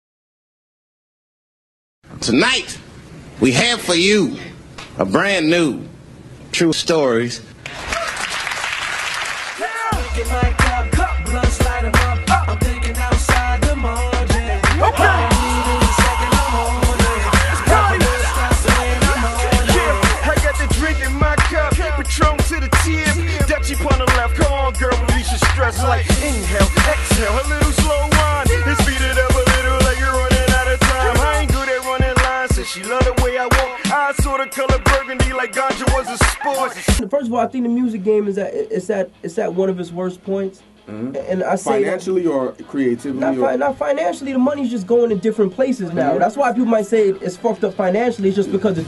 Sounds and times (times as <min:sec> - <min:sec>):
Speech: 0:06.5 - 0:07.5, 0:37.0 - 0:48.8
Music: 0:09.8 - 0:48.8.